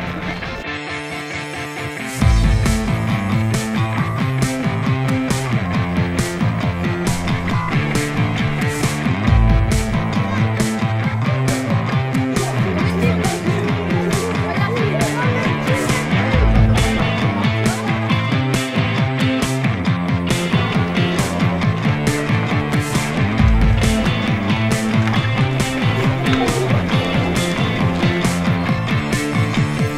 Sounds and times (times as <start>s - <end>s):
Music: 0.0s - 29.9s
Speech: 10.2s - 18.5s.